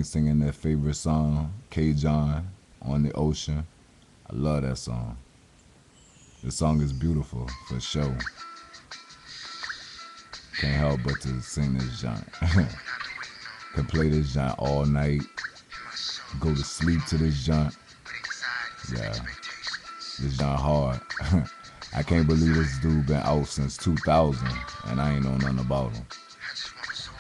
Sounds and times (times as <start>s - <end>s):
Speech: 0.0s - 3.7s, 4.3s - 5.2s, 6.4s - 8.3s, 10.6s - 12.8s, 13.8s - 15.3s, 16.3s - 17.8s, 18.4s - 19.4s, 20.2s - 27.2s
Music: 6.8s - 27.2s.